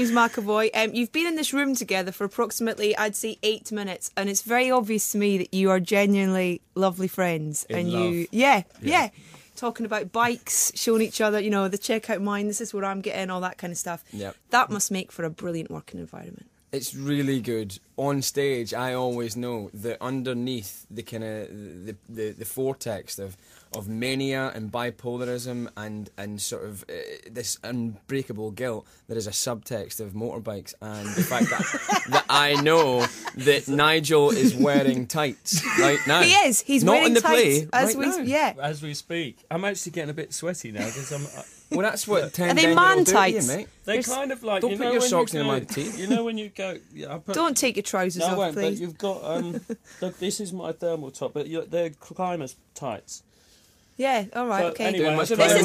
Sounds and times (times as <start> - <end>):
Speech: 7.7 - 9.1, 14.2 - 14.9, 32.3 - 40.8, 41.8 - 47.5, 54.0 - 55.6.